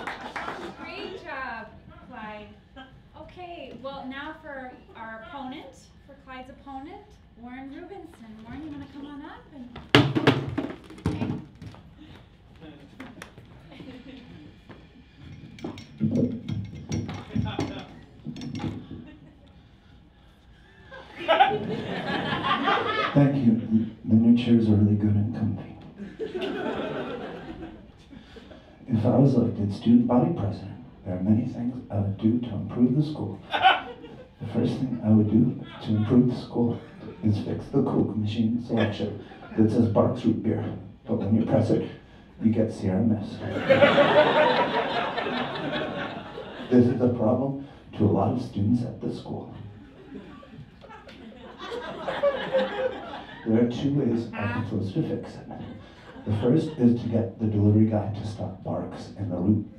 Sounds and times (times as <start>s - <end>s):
Female speech, woman speaking: 0.8s - 2.6s, 3.2s - 9.9s
Narration, monologue: 15.3s - 18.9s, 21.4s - 27.5s, 28.2s - 50.5s, 51.3s - 59.7s.